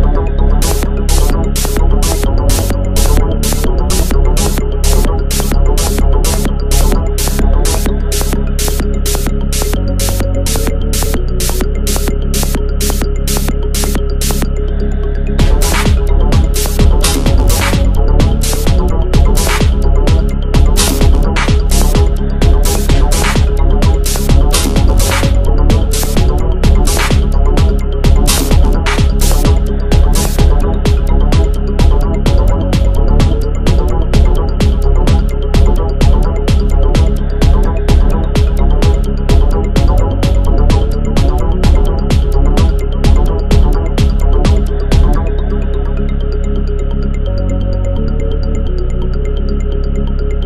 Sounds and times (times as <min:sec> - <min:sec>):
Techno: 0:00.0 - 0:50.4
Trance music: 0:00.0 - 0:50.4.